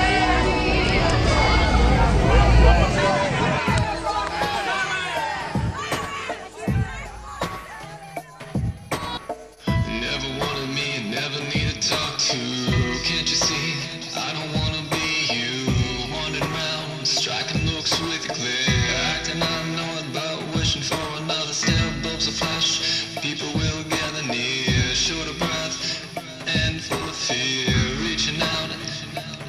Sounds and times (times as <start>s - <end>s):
Pop music: 0.0s - 29.4s.